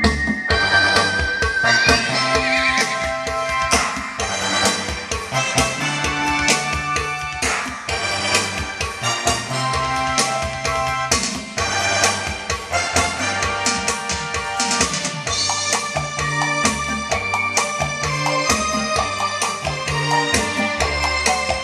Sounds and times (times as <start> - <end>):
Music: 0.0 - 21.6.